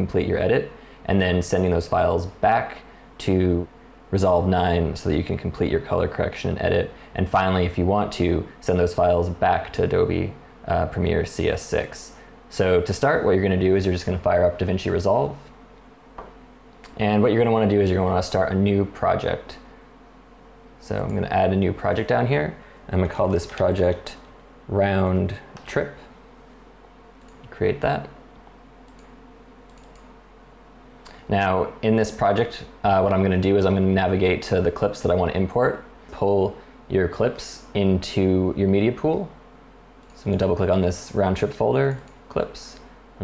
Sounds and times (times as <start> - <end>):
Speech: 0.0 - 15.6, 16.9 - 19.7, 20.8 - 26.2, 27.4 - 28.2, 31.3 - 39.4, 40.2 - 43.2.